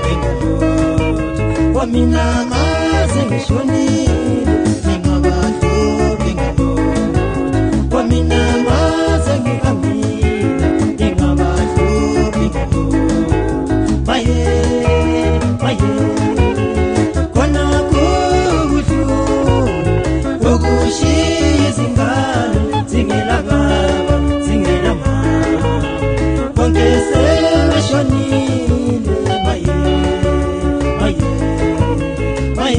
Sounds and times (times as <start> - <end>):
Music: 0.0 - 32.7.